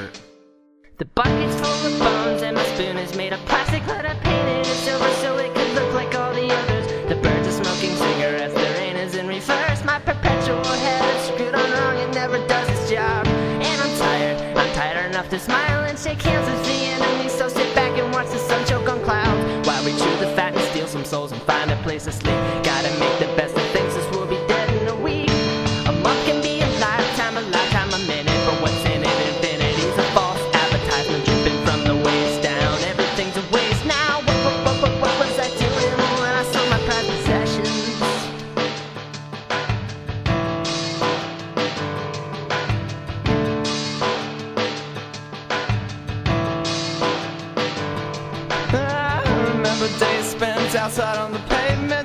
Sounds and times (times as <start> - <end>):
Music: 0.0 - 52.0.